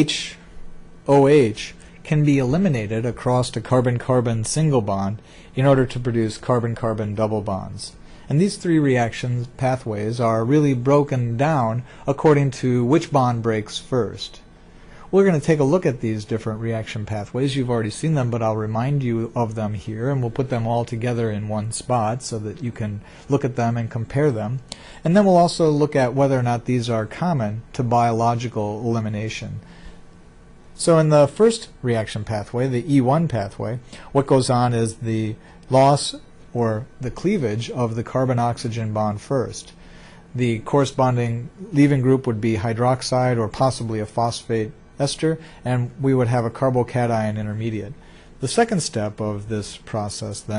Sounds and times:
Speech: 0:00.0 - 0:14.5, 0:15.1 - 0:29.7, 0:30.8 - 0:50.5.

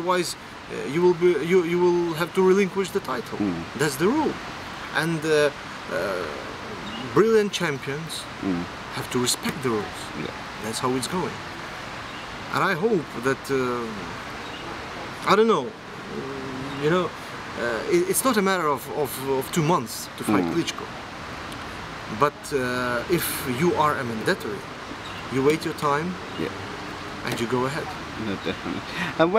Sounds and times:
Speech: 0:00.0 - 0:04.4, 0:05.0 - 0:06.4, 0:07.1 - 0:11.4, 0:16.7 - 0:20.9, 0:25.3 - 0:26.5
Outside, urban or manmade: 0:00.0 - 0:29.3.

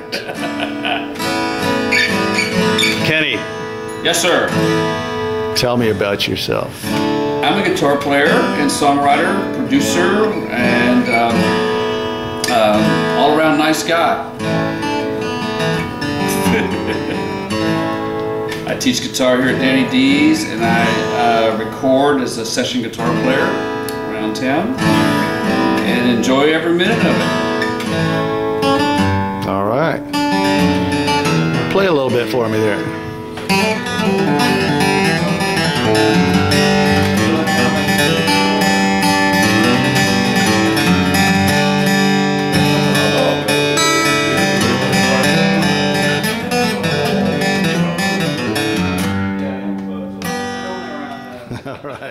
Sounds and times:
Music: 0:00.0 - 0:51.6
Speech: 0:04.0 - 0:04.6, 0:05.6 - 0:06.8, 0:07.4 - 0:11.5, 0:12.5 - 0:14.3, 0:18.7 - 0:24.8, 0:25.8 - 0:27.2, 0:29.4 - 0:30.1, 0:31.7 - 0:33.0, 0:49.3 - 0:51.5.

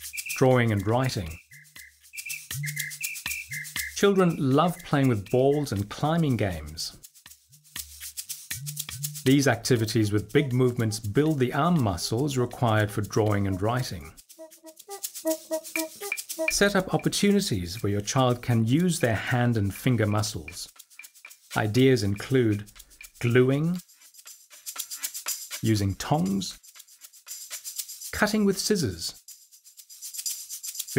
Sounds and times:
Music: 0:00.0 - 0:30.9
Speech: 0:00.4 - 0:01.4, 0:04.0 - 0:07.0, 0:09.3 - 0:14.2, 0:16.4 - 0:20.7, 0:21.6 - 0:23.8, 0:25.6 - 0:26.6, 0:28.2 - 0:29.2.

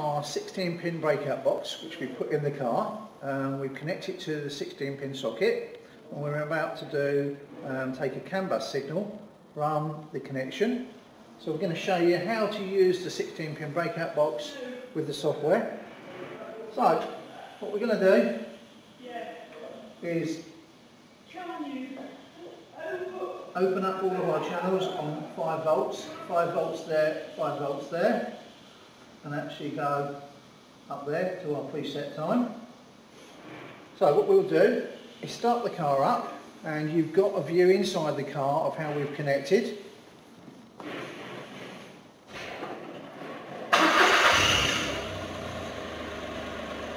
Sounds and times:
Speech: 0:00.0 - 0:20.5, 0:21.3 - 0:28.4, 0:29.2 - 0:30.2, 0:30.9 - 0:32.7, 0:34.0 - 0:39.8.

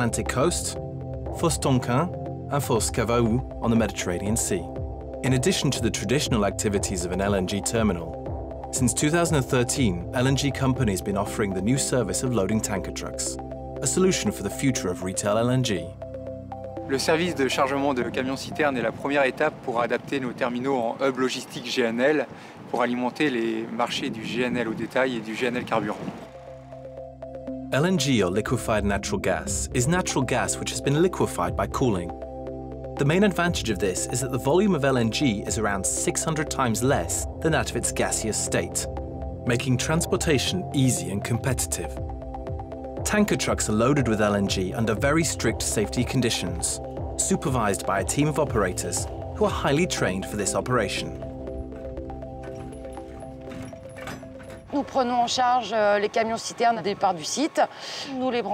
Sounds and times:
Speech: 0:00.0 - 0:00.8, 0:01.4 - 0:08.2, 0:08.8 - 0:15.9, 0:16.9 - 0:26.1, 0:27.8 - 0:32.1, 0:33.0 - 0:38.9, 0:39.5 - 0:42.0, 0:43.0 - 0:51.2, 0:54.8 - 0:58.5
Music: 0:00.0 - 0:20.7, 0:25.6 - 0:55.8.

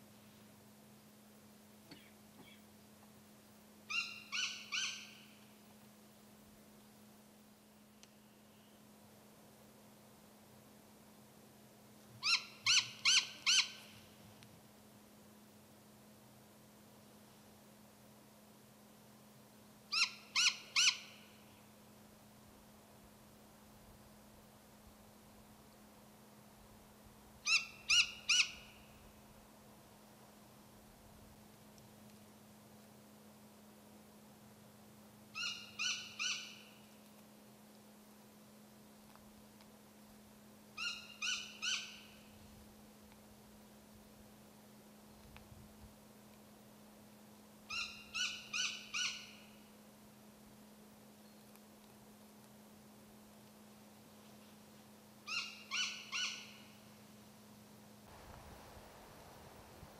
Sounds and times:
Owl: 0:01.9 - 0:02.7, 0:03.9 - 0:05.5, 0:12.2 - 0:14.1, 0:19.9 - 0:21.6, 0:27.4 - 0:29.0, 0:35.3 - 0:36.9, 0:40.8 - 0:42.4, 0:47.7 - 0:49.7, 0:55.3 - 0:56.9.

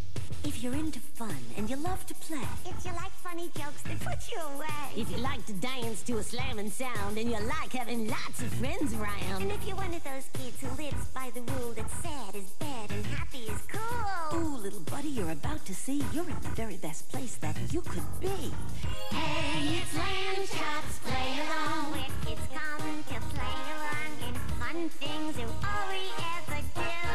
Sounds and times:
Music: 0:00.0 - 0:27.1.

